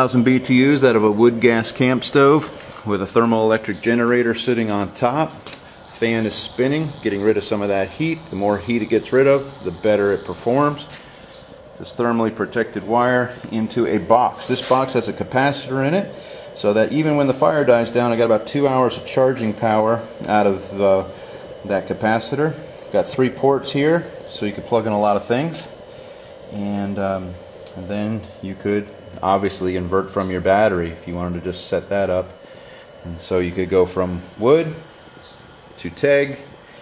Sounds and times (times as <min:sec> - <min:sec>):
Speech: 0:00.0 - 0:05.4, 0:06.0 - 0:10.9, 0:11.8 - 0:25.8, 0:26.5 - 0:32.4, 0:33.0 - 0:34.9, 0:35.8 - 0:36.5.